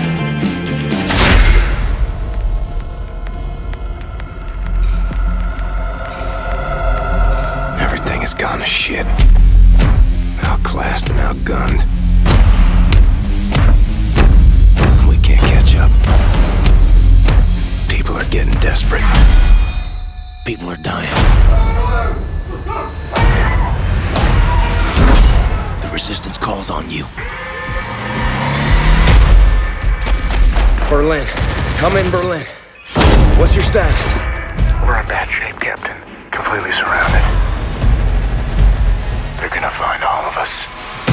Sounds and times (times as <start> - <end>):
Music: 0.0 - 41.1.